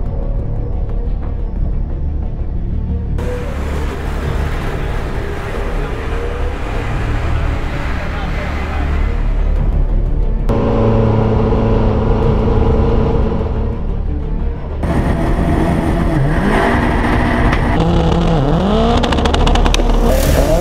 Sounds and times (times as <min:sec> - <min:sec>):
Car: 0:00.0 - 0:20.6
Music: 0:00.0 - 0:20.6.